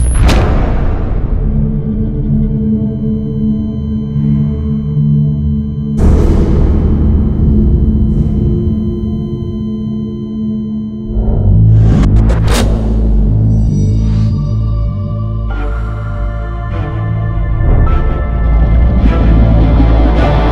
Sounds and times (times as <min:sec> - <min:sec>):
Music: 0:00.0 - 0:20.5.